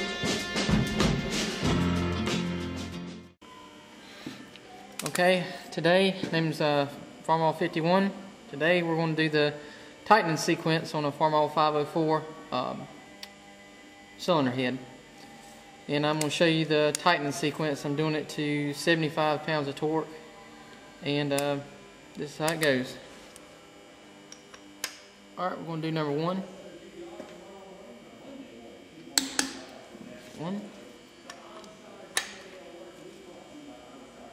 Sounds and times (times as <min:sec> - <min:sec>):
Speech: 0:05.0 - 0:12.9, 0:14.2 - 0:14.9, 0:15.9 - 0:20.2, 0:21.0 - 0:23.1, 0:25.4 - 0:34.3.